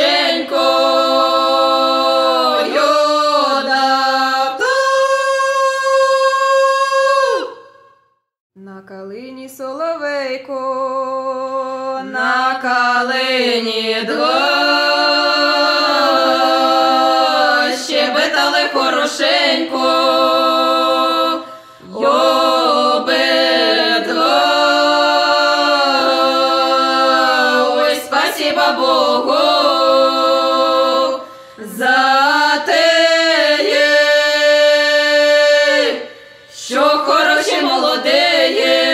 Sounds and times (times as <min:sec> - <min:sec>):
A capella: 0:00.0 - 0:38.9.